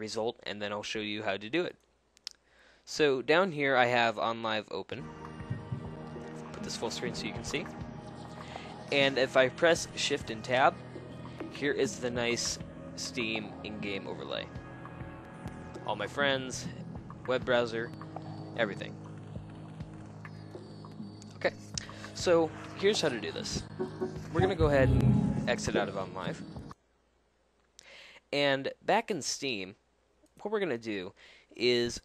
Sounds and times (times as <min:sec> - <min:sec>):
Speech: 0:00.0 - 0:01.8, 0:02.9 - 0:05.0, 0:06.6 - 0:07.7, 0:08.9 - 0:10.8, 0:11.6 - 0:14.5, 0:15.9 - 0:17.9, 0:18.6 - 0:18.9, 0:22.2 - 0:23.6, 0:24.3 - 0:26.4, 0:28.3 - 0:29.8, 0:30.4 - 0:32.0
Music: 0:05.0 - 0:26.8.